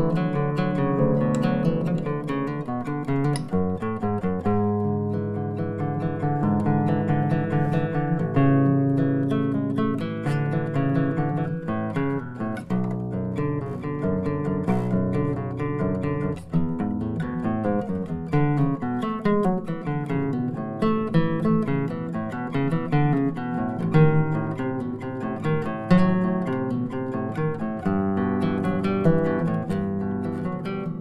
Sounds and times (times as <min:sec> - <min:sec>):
Strum: 0:00.0 - 0:31.0.